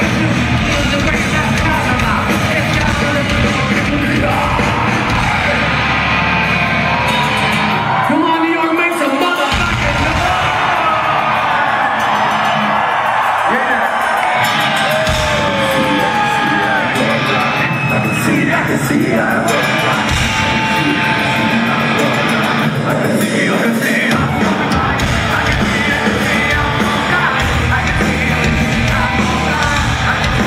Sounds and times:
Inside, large room or hall: 0:00.0 - 0:30.4
Music: 0:00.0 - 0:30.4
Speech: 0:08.1 - 0:10.9.

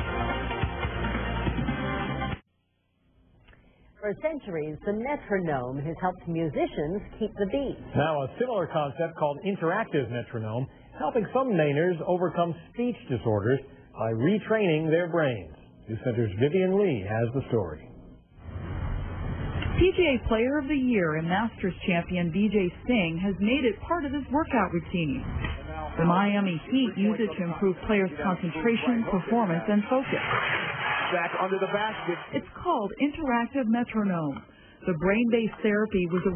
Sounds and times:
Female speech, woman speaking: 0:04.0 - 0:07.9, 0:19.8 - 0:25.2, 0:26.0 - 0:30.2, 0:32.4 - 0:36.3
Male speech, man speaking: 0:07.9 - 0:17.9, 0:26.7 - 0:30.1, 0:31.0 - 0:32.4.

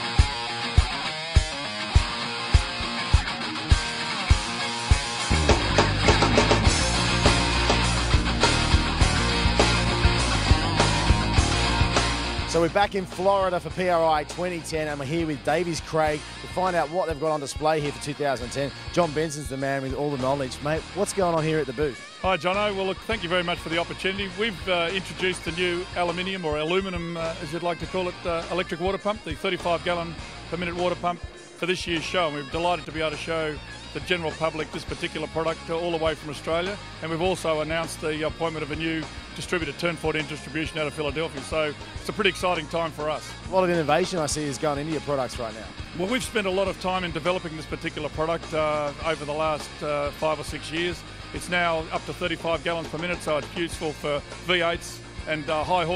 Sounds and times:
Music: 0:00.0 - 0:55.9
Speech: 0:12.5 - 0:55.9.

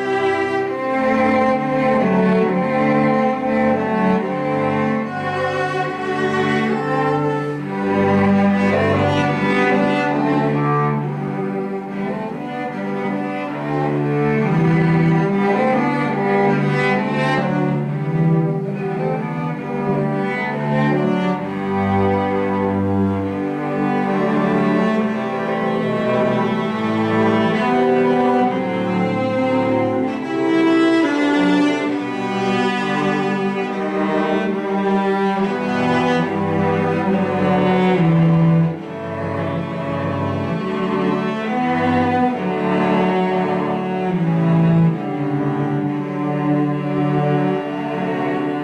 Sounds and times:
Cello: 0:00.0 - 0:48.6.

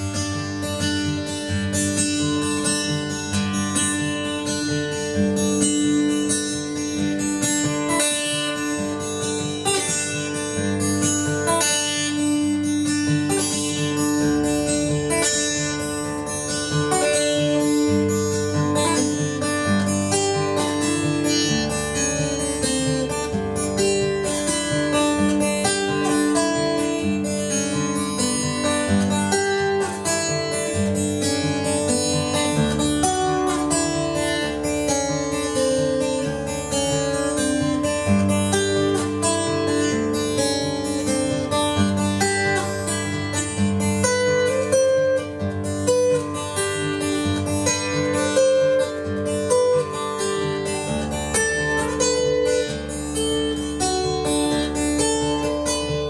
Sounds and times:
Acoustic guitar: 0:00.0 - 0:56.0
Strum: 0:00.0 - 0:56.0.

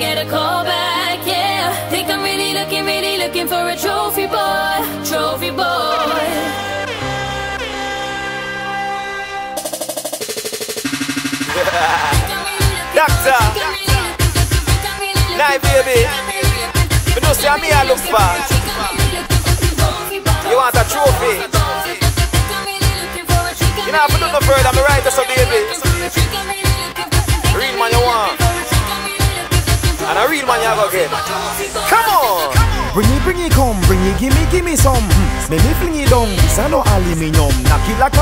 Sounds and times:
Singing: 0:00.0 - 0:08.1, 0:11.5 - 0:38.2
Reggae: 0:09.5 - 0:38.2.

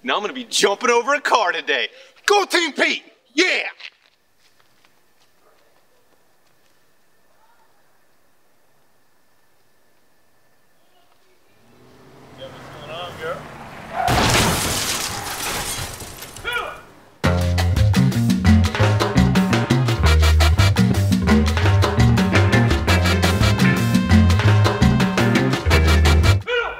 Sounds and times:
Music: 0:17.2 - 0:26.4.

